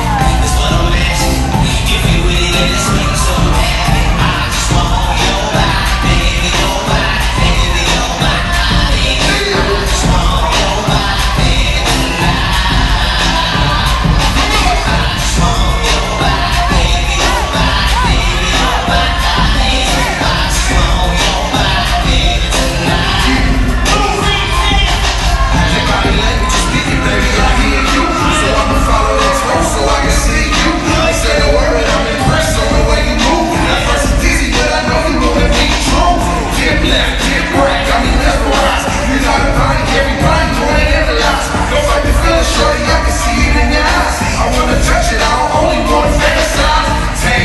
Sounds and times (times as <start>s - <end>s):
Music: 0.0s - 47.4s.